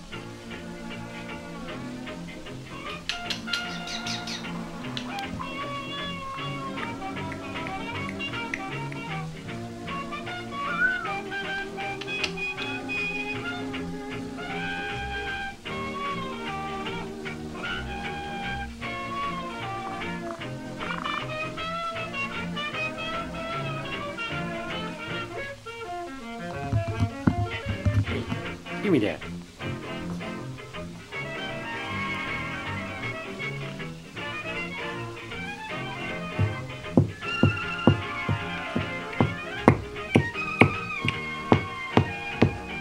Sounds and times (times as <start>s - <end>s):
Music: 0.0s - 42.8s
Bird: 2.9s - 7.0s, 19.7s - 22.0s
Domestic animals, pets: 3.2s - 7.0s.